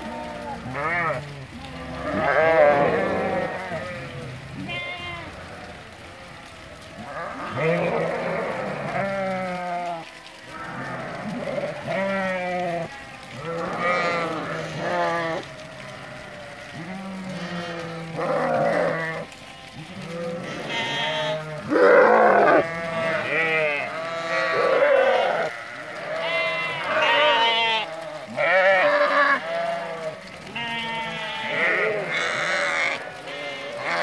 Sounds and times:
Sheep: 0:00.0 - 0:34.0.

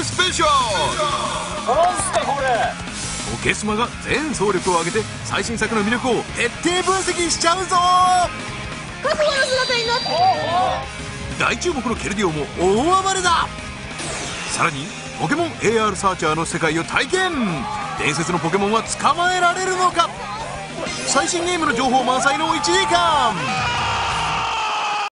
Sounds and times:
Music: 0:00.0 - 0:25.1.

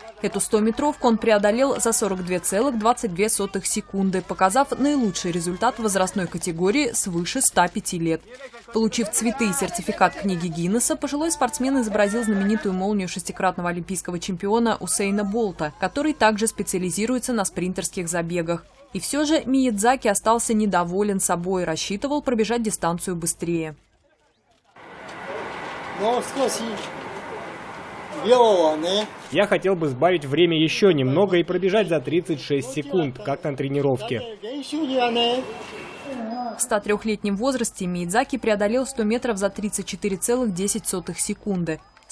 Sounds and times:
Outside, urban or manmade: 0:00.0 - 0:42.1.

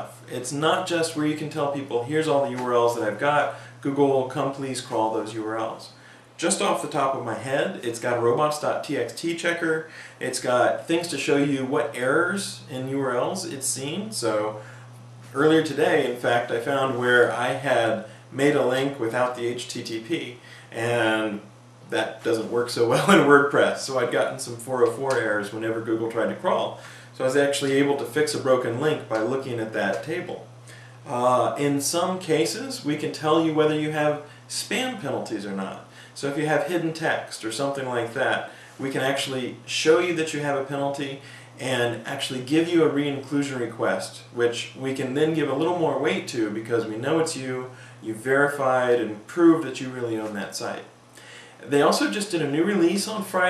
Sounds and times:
Speech: 0:00.0 - 0:14.6, 0:15.3 - 0:30.5, 0:31.1 - 0:51.0, 0:51.6 - 0:53.5
Inside, small room: 0:00.0 - 0:53.5.

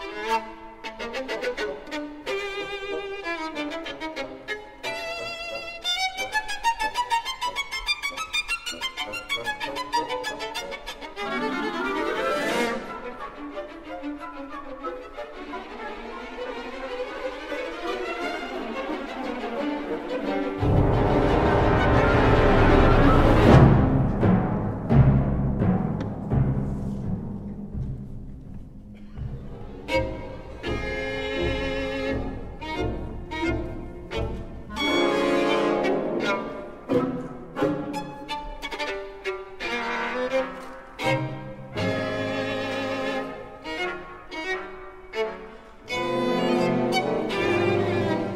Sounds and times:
Violin, fiddle: 0:00.0 - 0:23.2, 0:29.6 - 0:48.3.

